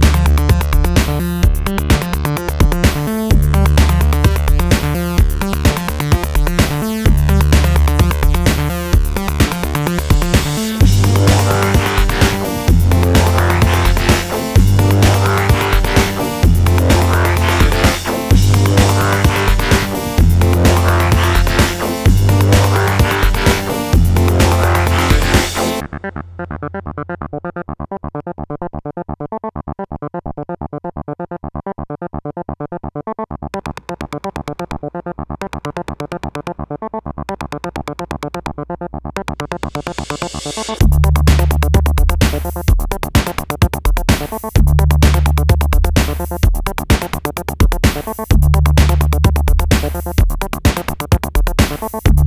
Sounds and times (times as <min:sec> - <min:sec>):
Music: 0:00.0 - 0:52.2.